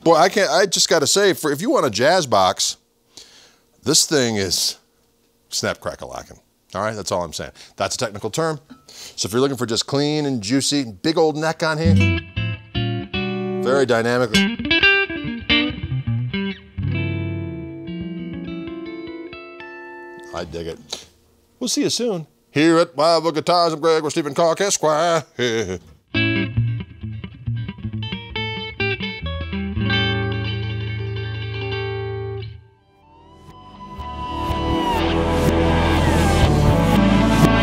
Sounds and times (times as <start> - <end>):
Electric guitar: 11.8 - 13.7, 14.3 - 20.2, 26.1 - 37.6.